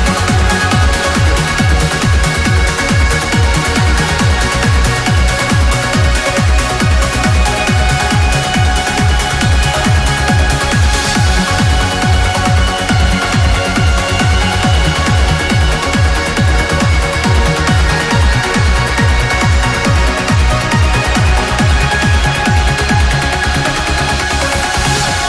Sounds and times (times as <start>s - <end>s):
Electronica: 0.0s - 25.2s
Exciting music: 0.0s - 25.2s.